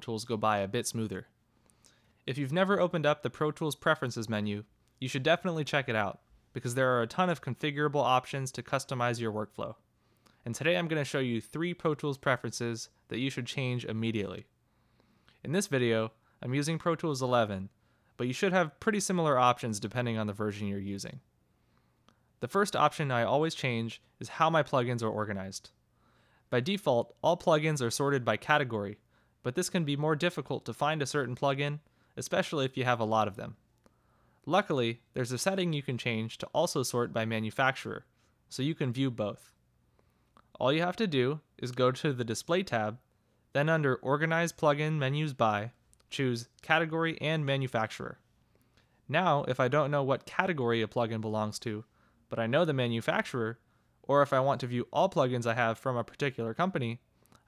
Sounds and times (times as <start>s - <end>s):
Speech: 0.0s - 1.4s, 2.2s - 9.8s, 10.4s - 14.5s, 15.4s - 21.3s, 22.4s - 25.8s, 26.5s - 33.6s, 34.5s - 39.6s, 40.5s - 48.2s, 49.1s - 57.0s.